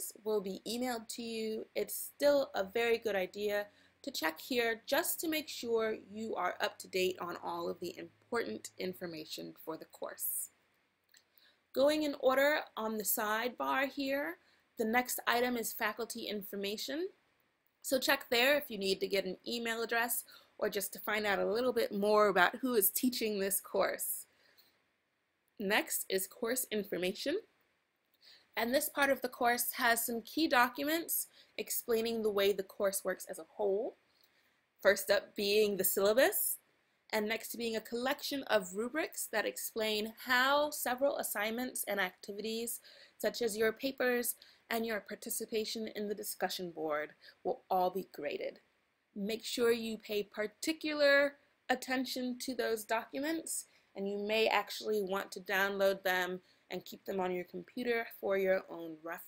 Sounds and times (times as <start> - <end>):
Speech: 0.0 - 10.5, 11.8 - 17.1, 17.9 - 24.2, 25.6 - 27.4, 28.6 - 33.9, 34.8 - 36.6, 37.2 - 48.6, 49.2 - 59.2.